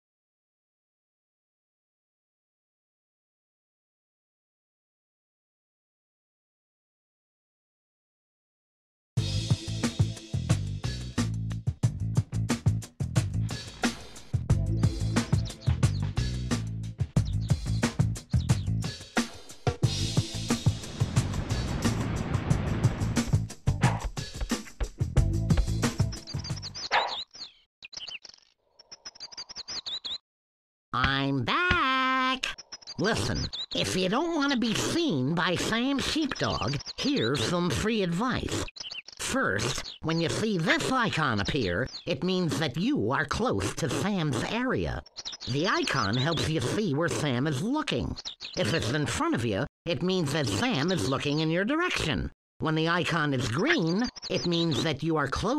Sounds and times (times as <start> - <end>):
Music: 9.2 - 26.8.